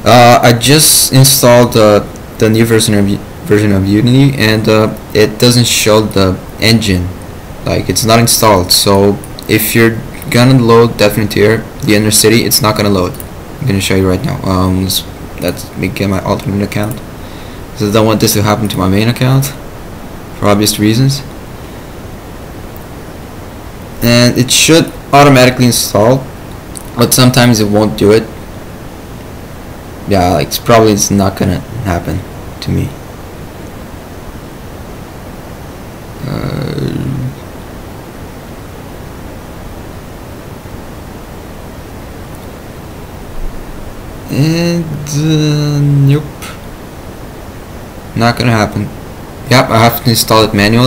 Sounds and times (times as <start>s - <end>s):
Speech: 0.0s - 17.0s, 17.8s - 19.6s, 20.4s - 21.3s, 24.0s - 28.4s, 30.1s - 33.0s, 36.2s - 37.4s, 44.3s - 46.6s, 48.2s - 50.8s.